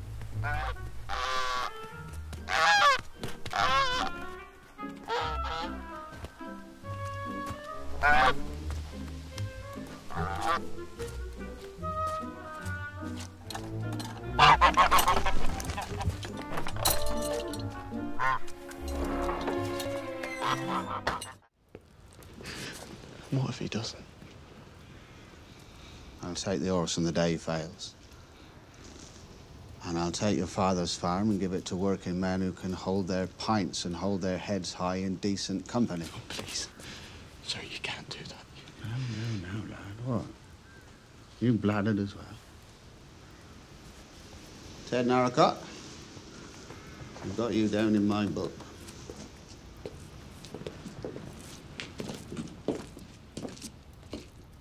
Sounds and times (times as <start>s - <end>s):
Speech: 23.3s - 24.1s, 26.2s - 28.0s, 29.8s - 36.7s, 44.9s - 45.7s, 47.2s - 48.6s.